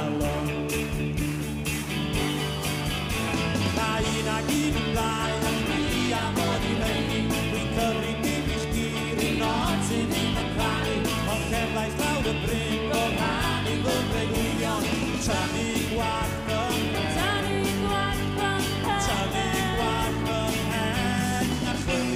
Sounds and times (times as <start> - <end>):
Singing: 0.0 - 1.0, 3.7 - 22.1
Rock and roll: 0.0 - 22.1.